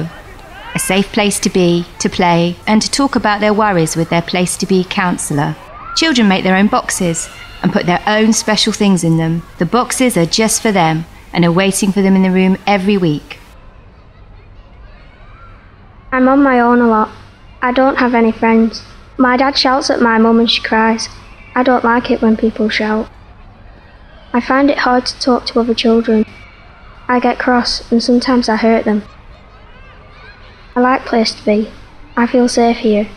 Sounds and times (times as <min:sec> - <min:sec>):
Speech: 0:00.0 - 0:13.4, 0:16.2 - 0:23.1, 0:24.4 - 0:26.3, 0:27.1 - 0:29.1, 0:30.8 - 0:33.1.